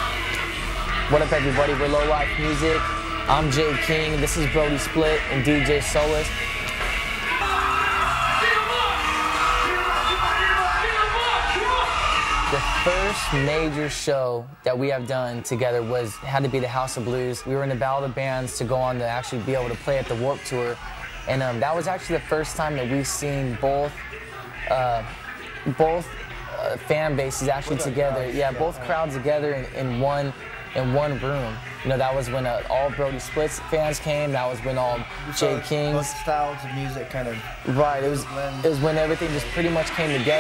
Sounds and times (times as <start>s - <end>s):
Music: 0.0s - 40.4s
Speech: 1.1s - 6.3s, 12.5s - 24.0s, 24.6s - 40.4s.